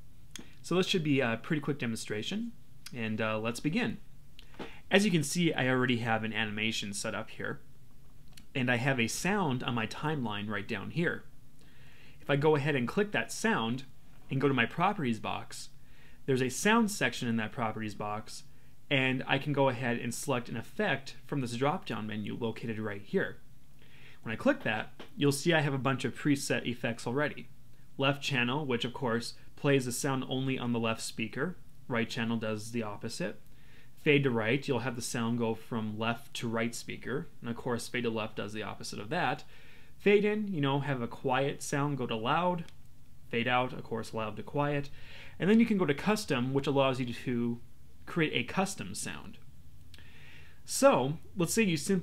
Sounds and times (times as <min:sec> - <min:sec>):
Speech: 0:00.6 - 0:04.1, 0:04.9 - 0:07.7, 0:08.4 - 0:11.3, 0:12.2 - 0:23.4, 0:24.2 - 0:33.4, 0:34.0 - 0:49.4, 0:50.7 - 0:52.0.